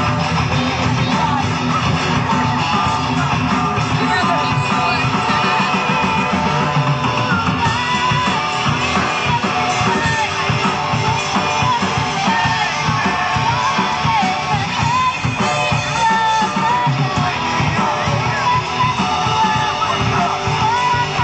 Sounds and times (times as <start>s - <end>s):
Music: 0.0s - 21.2s
Outside, urban or manmade: 0.0s - 21.2s
Singing: 0.0s - 21.2s
Speech: 3.8s - 6.0s.